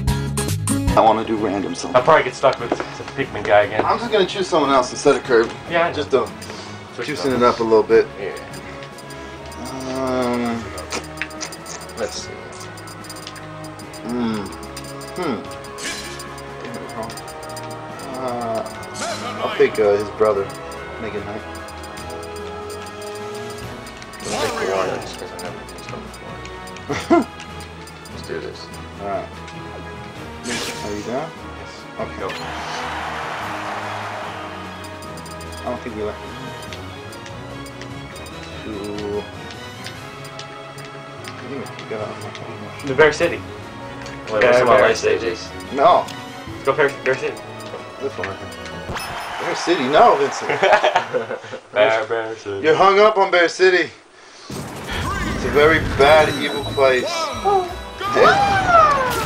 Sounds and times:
Music: 0:00.0 - 0:51.4, 0:56.0 - 0:59.2.

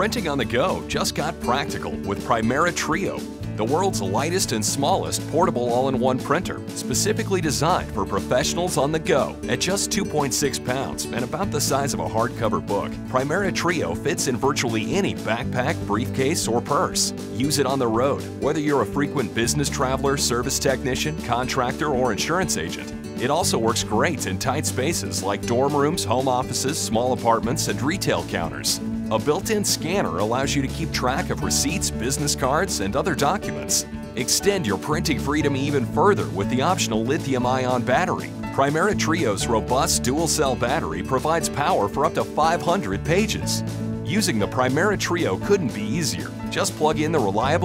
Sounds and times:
Music: 0:00.0 - 0:47.6
Speech: 0:00.0 - 0:47.6.

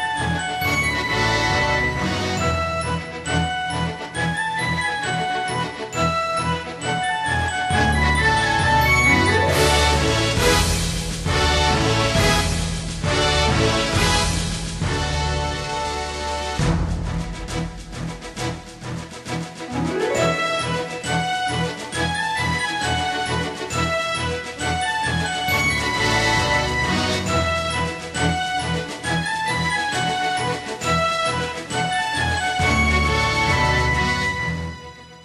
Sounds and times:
Music: 0:00.0 - 0:35.2.

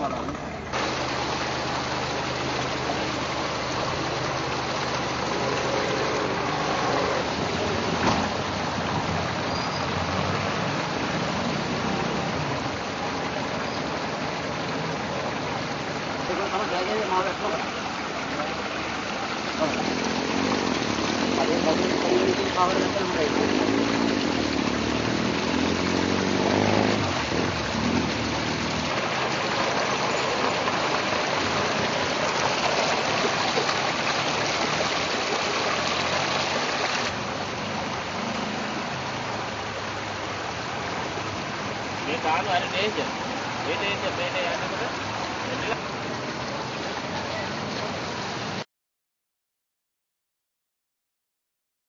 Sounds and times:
Vehicle: 0:00.0 - 0:48.6
Stream: 0:00.0 - 0:48.7
Speech: 0:16.3 - 0:17.7, 0:21.4 - 0:23.7, 0:42.0 - 0:43.1, 0:43.7 - 0:45.8.

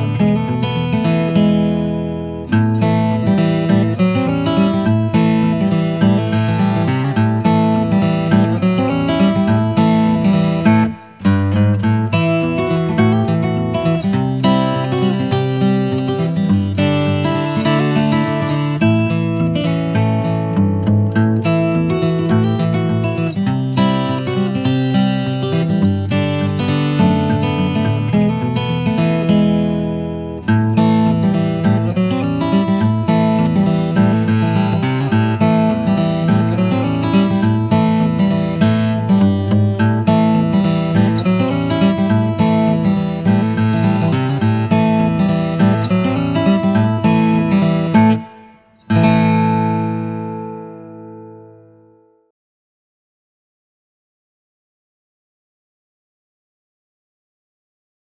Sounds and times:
Music: 0:00.0 - 0:52.3.

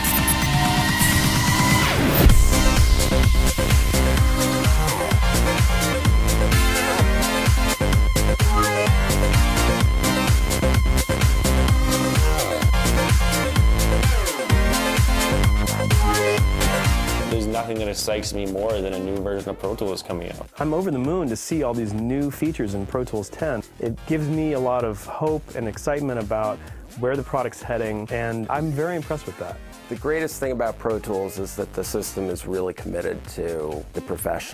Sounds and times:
Music: 0:00.0 - 0:34.5
Speech: 0:17.3 - 0:34.5.

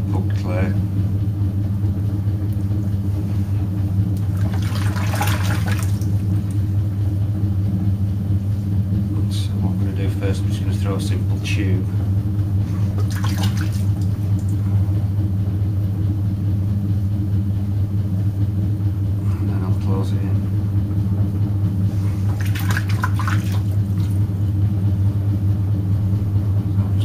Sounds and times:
Speech: 0:00.0 - 0:00.8, 0:09.1 - 0:12.0, 0:19.2 - 0:20.5, 0:26.8 - 0:27.0
Liquid: 0:04.1 - 0:06.7, 0:12.7 - 0:14.6, 0:21.9 - 0:24.3.

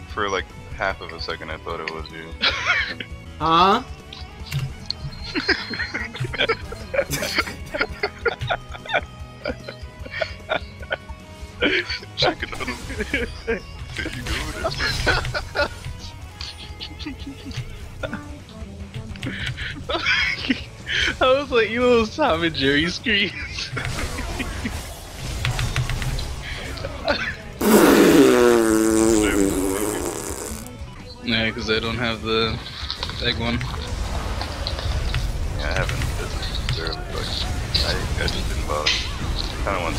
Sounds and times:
Music: 0:00.0 - 0:39.9.

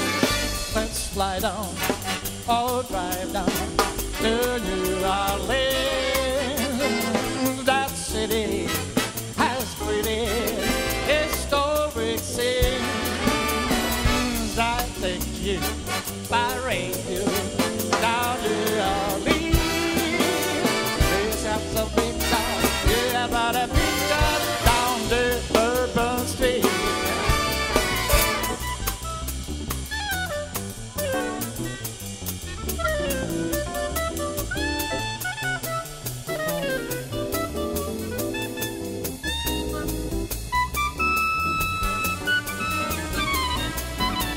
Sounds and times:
Jazz: 0:00.0 - 0:44.3
Orchestra: 0:00.0 - 0:44.3.

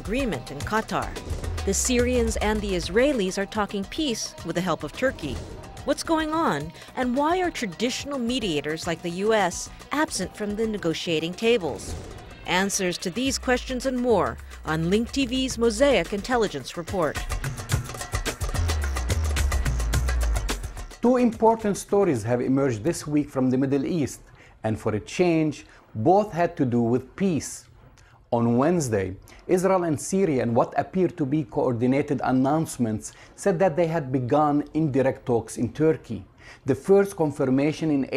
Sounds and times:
Speech: 0:00.0 - 0:11.9, 0:12.5 - 0:17.2, 0:21.0 - 0:27.7, 0:28.3 - 0:38.1
Music: 0:00.0 - 0:24.0.

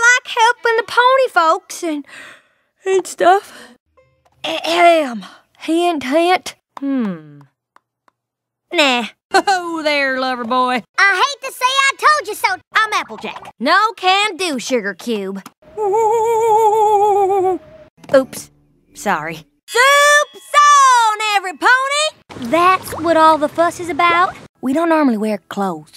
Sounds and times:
Speech: 0:08.7 - 0:17.5, 0:18.1 - 0:25.9.

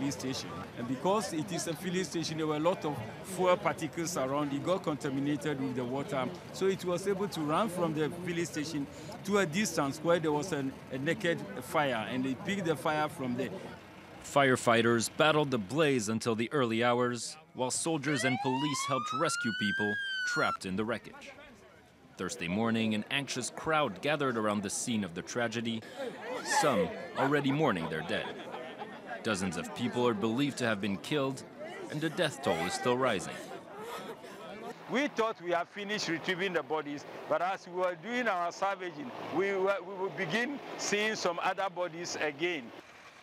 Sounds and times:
Speech: 0:00.0 - 0:21.6, 0:22.2 - 0:28.5, 0:29.2 - 0:33.5, 0:34.4 - 0:42.7.

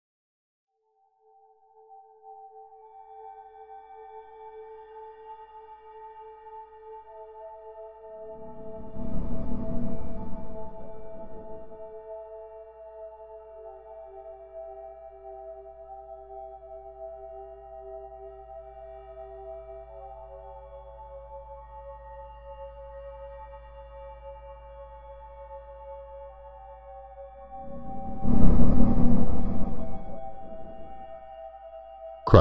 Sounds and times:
Ambient music: 0:02.3 - 0:32.4.

